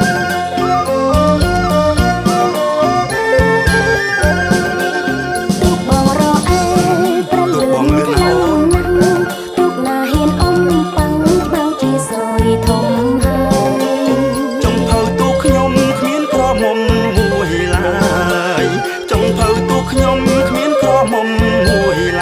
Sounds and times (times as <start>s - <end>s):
Music: 0.0s - 22.2s
Speech: 7.3s - 8.8s.